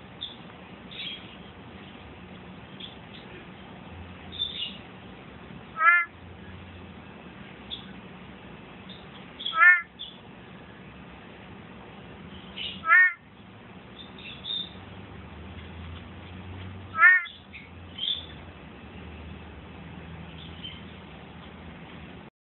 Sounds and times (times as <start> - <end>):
Frog: 5.8 - 6.1, 9.5 - 9.9, 12.8 - 13.2, 17.0 - 17.4.